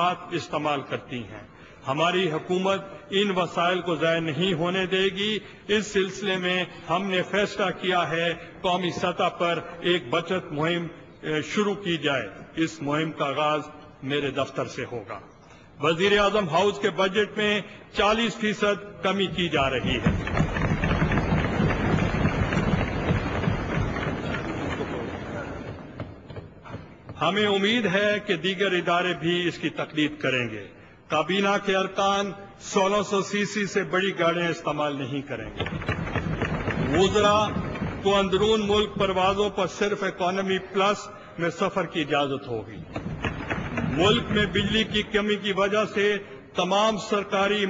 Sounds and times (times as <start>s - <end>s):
Male speech, man speaking: 0.0s - 15.2s, 15.8s - 20.1s, 27.2s - 35.5s, 36.9s - 42.8s, 44.0s - 47.7s
Narration, monologue: 0.0s - 23.9s, 24.9s - 47.7s.